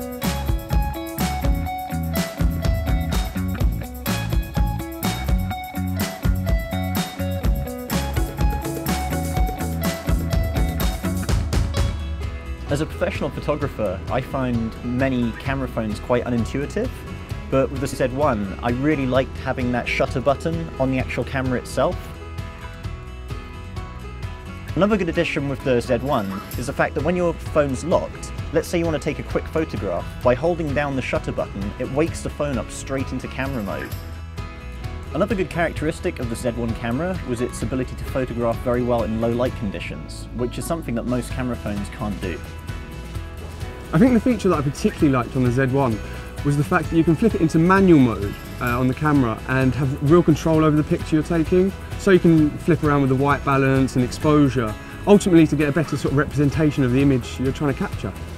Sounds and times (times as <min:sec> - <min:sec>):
Music: 0:00.0 - 0:58.3
Speech: 0:12.7 - 0:22.2, 0:24.8 - 0:33.9, 0:35.1 - 0:42.5, 0:43.9 - 0:58.2.